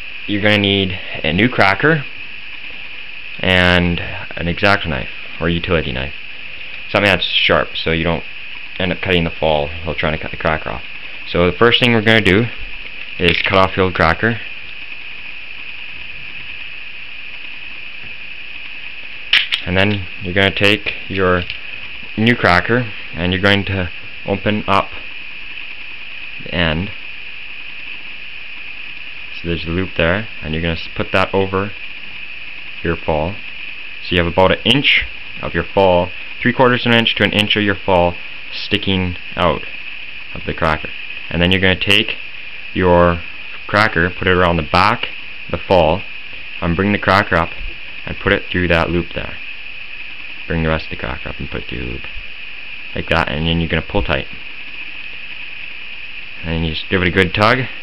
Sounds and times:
Speech: 0.3 - 2.1, 3.4 - 6.2, 6.9 - 12.6, 13.2 - 14.5, 19.6 - 21.5, 22.2 - 25.0, 26.4 - 27.0, 29.4 - 31.8, 32.8 - 33.4, 34.0 - 39.7, 40.3 - 42.2, 42.8 - 49.4, 50.5 - 52.2, 53.0 - 54.4, 56.4 - 57.8.

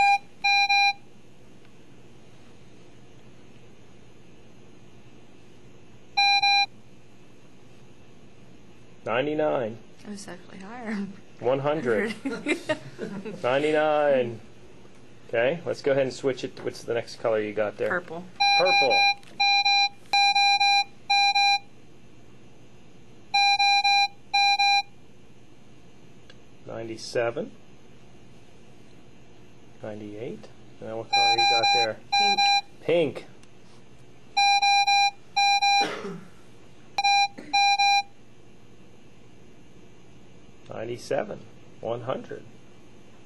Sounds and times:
Pulse: 31.1 - 32.7, 34.4 - 36.0, 37.0 - 38.2
Beep, bleep: 31.2 - 32.6.

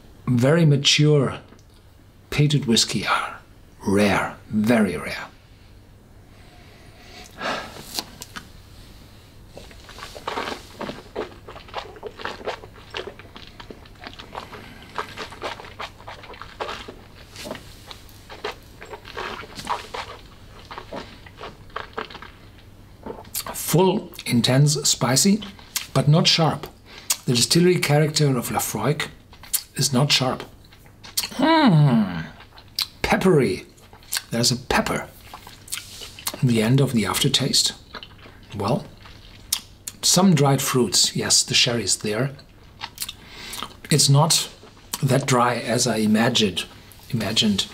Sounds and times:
Inside, small room: 0.0 - 47.7.

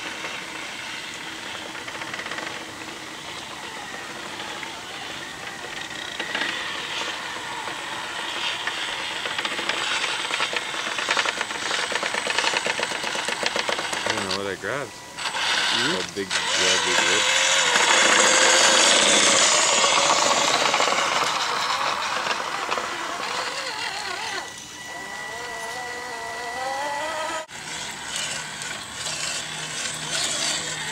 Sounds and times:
Truck: 0.0 - 17.2, 27.5 - 30.9
Outside, rural or natural: 0.0 - 30.9
Speech: 14.1 - 15.0, 15.8 - 17.3.

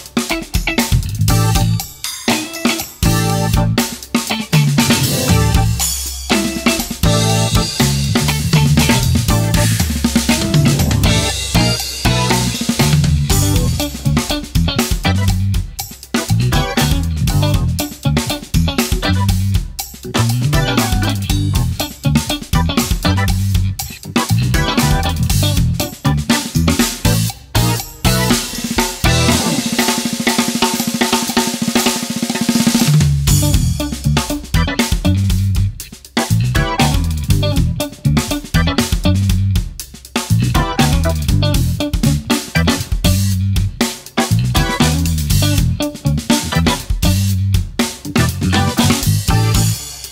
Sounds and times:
Snare drum: 0.0 - 14.0, 26.3 - 35.2
Heavy metal: 0.0 - 39.5, 40.3 - 50.1
Drum kit: 0.0 - 50.1.

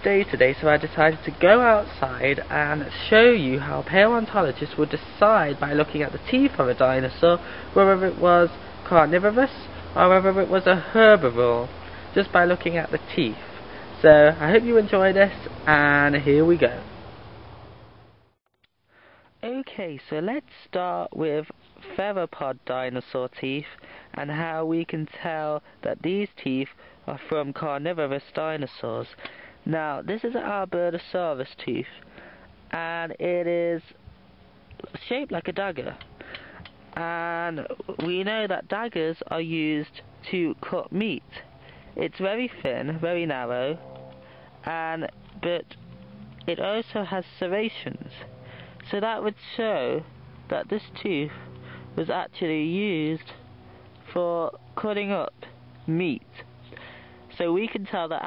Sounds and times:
Speech: 0.0 - 16.9, 19.4 - 32.0, 32.7 - 34.0, 34.8 - 36.0, 37.0 - 43.8, 44.6 - 45.7, 46.5 - 51.4, 52.0 - 53.4, 54.0 - 56.5, 57.3 - 58.2.

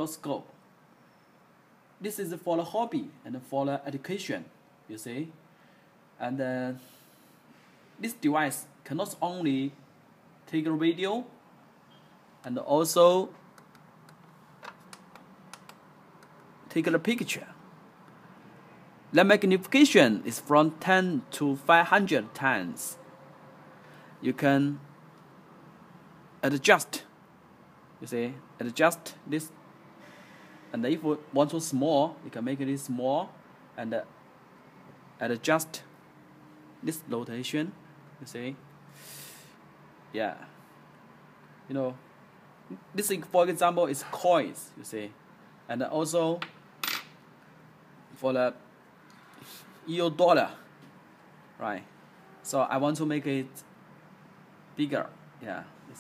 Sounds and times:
Speech: 0.0 - 0.5, 2.0 - 5.4, 6.2 - 6.9, 8.0 - 9.8, 10.5 - 11.4, 12.4 - 13.4, 16.7 - 17.6, 19.2 - 23.0, 24.2 - 24.8, 26.4 - 27.1, 28.0 - 29.6, 30.7 - 34.1, 35.2 - 35.9, 36.8 - 38.6, 40.2 - 40.6, 41.7 - 42.0, 42.7 - 46.4, 48.2 - 48.6, 49.8 - 50.7, 51.6 - 53.7, 54.8 - 56.0.

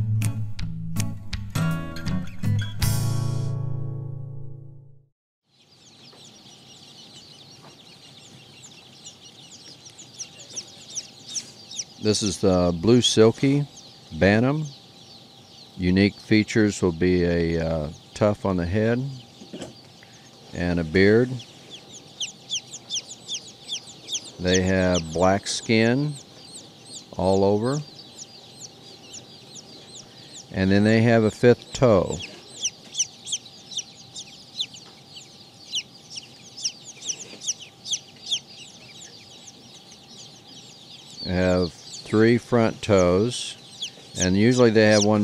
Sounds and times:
Speech: 12.0 - 14.7, 15.8 - 19.2, 20.6 - 21.4, 24.4 - 26.2, 27.2 - 27.9, 30.5 - 32.3, 41.2 - 43.6, 44.2 - 45.2.

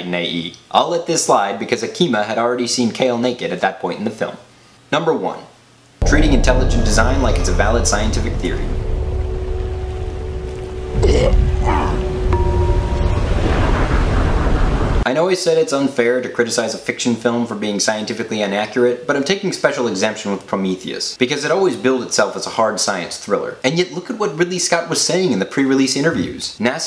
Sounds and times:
Speech: 0.0 - 8.8, 15.0 - 26.8
Music: 6.0 - 13.2
Outside, rural or natural: 6.0 - 15.0.

